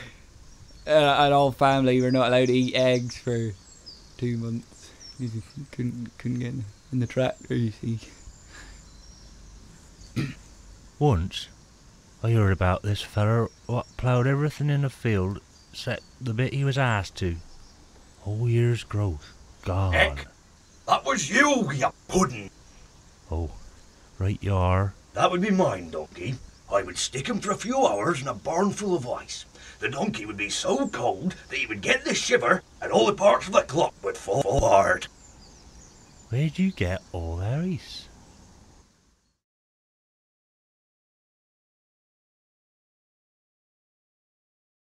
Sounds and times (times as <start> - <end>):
Speech: 0.9 - 3.6, 4.2 - 8.2, 11.0 - 11.5, 12.2 - 17.4, 18.2 - 20.3, 20.9 - 22.5, 23.3 - 23.6, 24.2 - 35.1, 36.3 - 38.1.